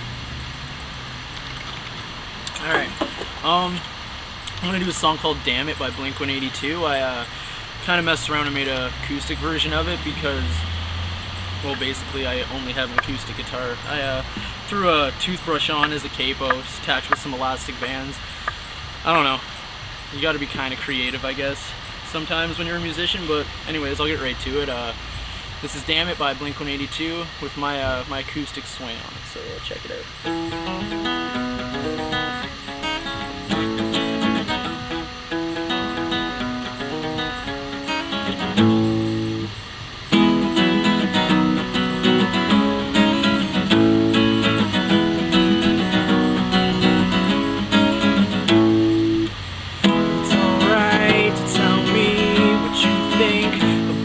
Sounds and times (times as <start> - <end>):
Guitar: 0.0 - 19.4, 30.0 - 54.0
Speech: 2.5 - 3.8, 4.5 - 10.6, 11.6 - 18.2, 19.0 - 19.4, 20.1 - 25.0, 25.6 - 30.1, 50.3 - 54.0.